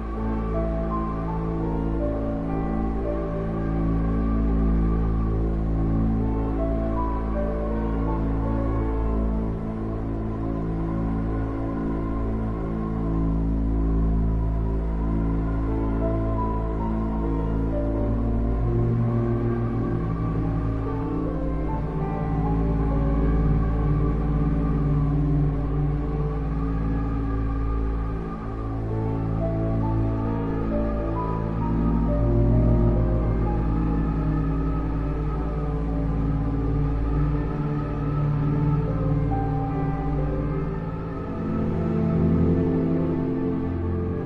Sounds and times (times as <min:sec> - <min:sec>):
Music: 0:00.0 - 0:44.2.